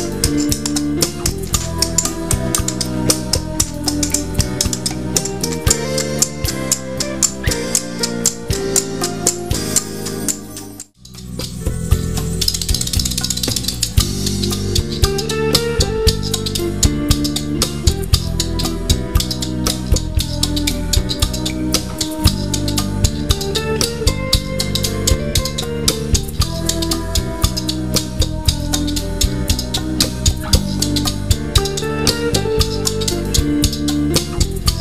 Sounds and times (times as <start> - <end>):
Independent music: 0.0 - 34.8.